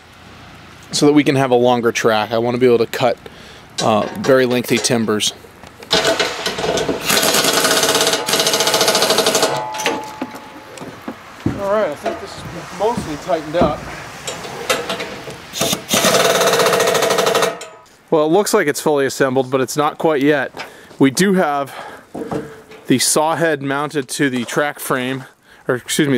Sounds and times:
Outside, urban or manmade: 0:00.0 - 0:26.1
Speech: 0:00.9 - 0:03.2, 0:03.8 - 0:05.4, 0:11.5 - 0:13.8, 0:18.1 - 0:21.8, 0:22.9 - 0:26.1.

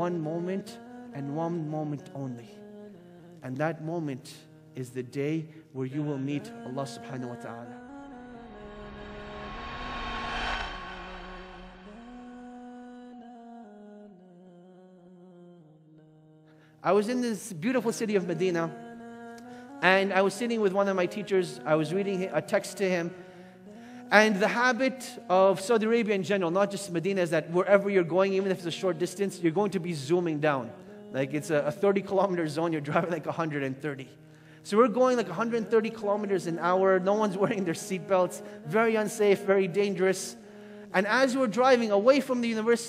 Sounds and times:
Speech: 0:00.0 - 0:02.5, 0:03.4 - 0:07.8, 0:16.8 - 0:18.8, 0:19.8 - 0:23.1, 0:24.1 - 0:34.1, 0:34.7 - 0:40.4, 0:41.0 - 0:42.8.

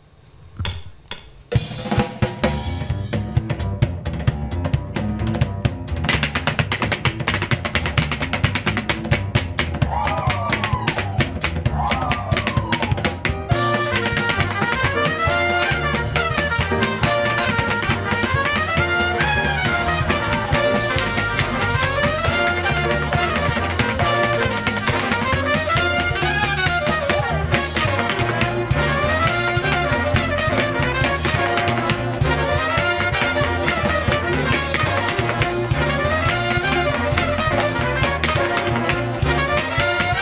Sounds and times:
Music: 0:00.0 - 0:40.2.

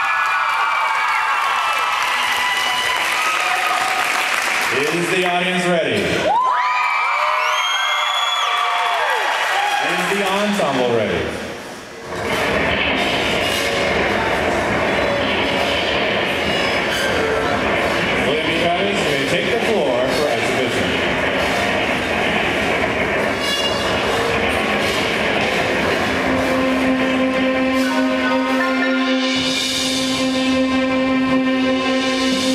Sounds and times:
Speech: 0:04.7 - 0:06.2, 0:09.8 - 0:11.4, 0:18.2 - 0:21.0
Music: 0:23.4 - 0:32.5.

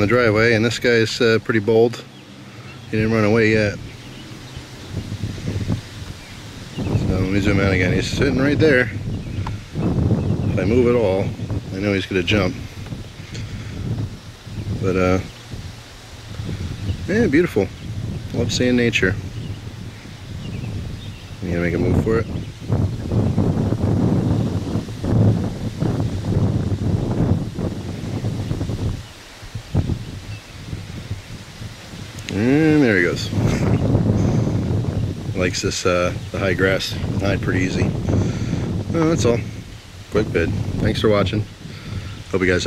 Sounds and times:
Speech: 0:00.0 - 0:02.1, 0:02.9 - 0:03.8, 0:07.0 - 0:09.0, 0:10.6 - 0:12.6, 0:14.8 - 0:15.3, 0:17.1 - 0:17.7, 0:18.3 - 0:19.2, 0:21.4 - 0:22.3, 0:32.2 - 0:33.7, 0:35.4 - 0:38.0, 0:38.9 - 0:39.5, 0:40.1 - 0:41.5, 0:42.3 - 0:42.6
Outside, rural or natural: 0:00.0 - 0:42.6
Rustling leaves: 0:00.0 - 0:42.6.

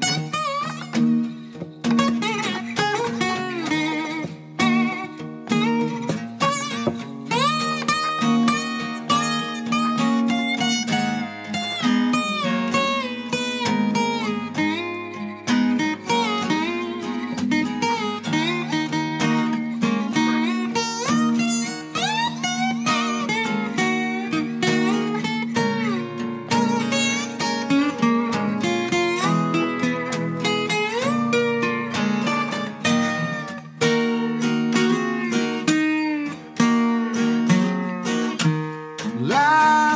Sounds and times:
Strum: 0:00.0 - 0:39.9.

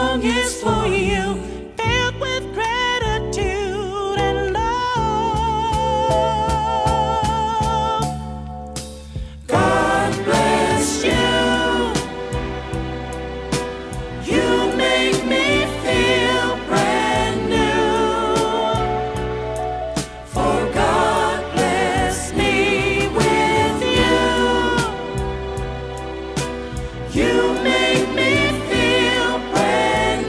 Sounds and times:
Soul music: 0:00.0 - 0:30.2.

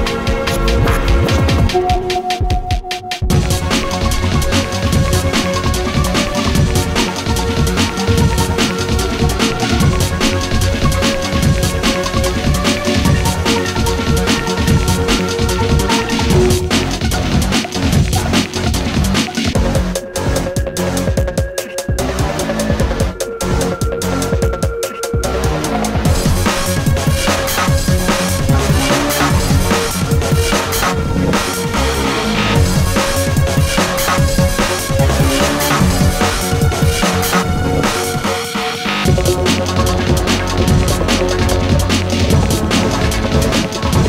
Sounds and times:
Rhythm and blues: 0:00.0 - 0:44.0.

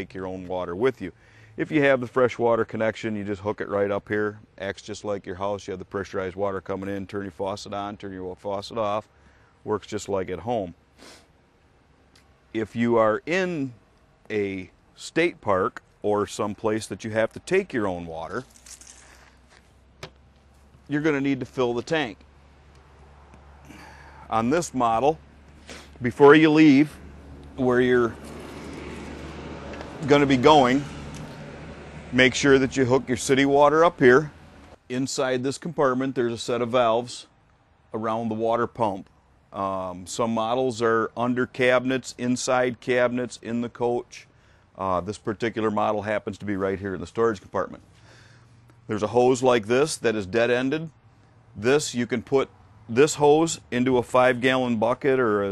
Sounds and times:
Speech: 0:00.0 - 0:09.1, 0:09.7 - 0:10.8, 0:12.6 - 0:18.5, 0:20.9 - 0:22.2, 0:24.3 - 0:25.2, 0:26.0 - 0:27.0, 0:27.6 - 0:28.2, 0:30.0 - 0:30.9, 0:32.1 - 0:37.3, 0:37.9 - 0:47.8, 0:48.9 - 0:51.0, 0:51.6 - 0:55.5.

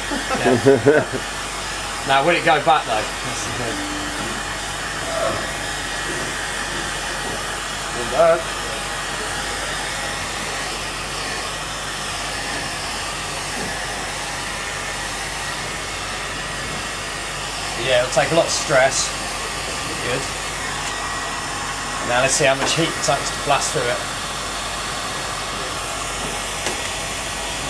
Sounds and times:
Hair dryer: 0:00.0 - 0:27.7.

